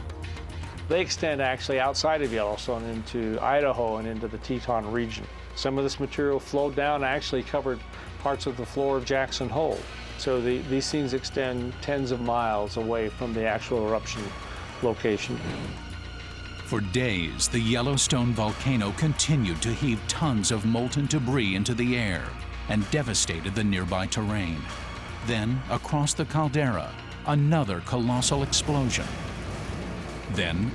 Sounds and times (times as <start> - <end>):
Music: 0.0 - 30.7
Speech: 0.9 - 15.4, 16.7 - 29.1, 30.3 - 30.7.